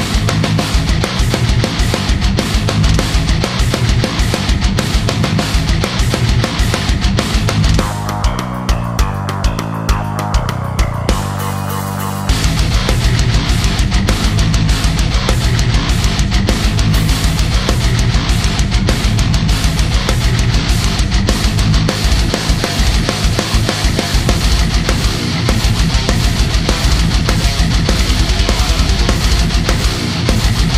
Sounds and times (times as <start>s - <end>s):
Drum kit: 0.0s - 30.7s.